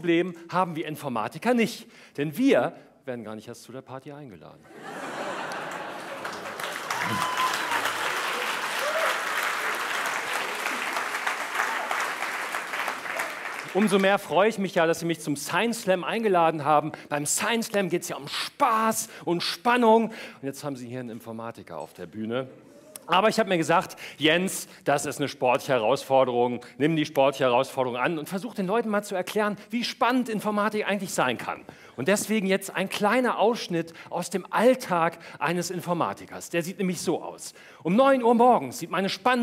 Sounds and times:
Speech: 0.0s - 4.6s, 13.7s - 22.5s, 23.1s - 39.4s.

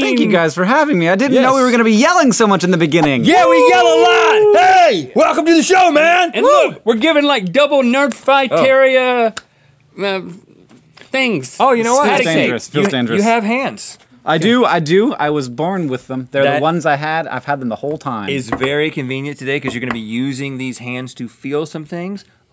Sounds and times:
Speech: 11.2s - 22.3s.

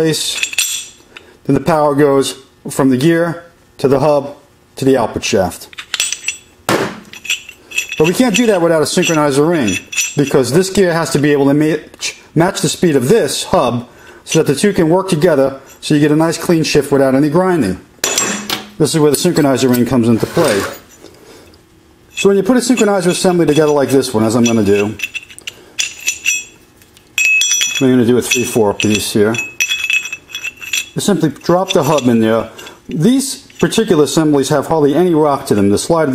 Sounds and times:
Speech: 0.0s - 0.4s, 1.5s - 5.7s, 8.0s - 17.9s, 18.8s - 20.8s, 22.2s - 25.0s, 27.8s - 29.5s, 31.0s - 36.1s.

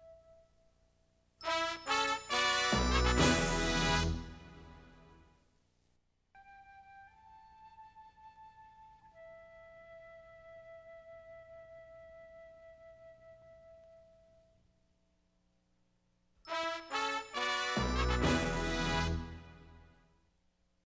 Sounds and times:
Music: 0.0s - 5.5s, 6.3s - 14.7s, 16.4s - 20.3s.

